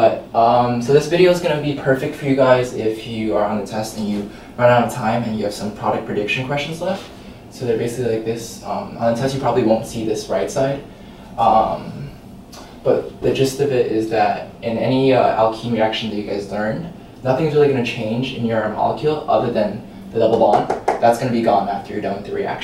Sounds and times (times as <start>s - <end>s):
Speech: 0.0s - 22.6s.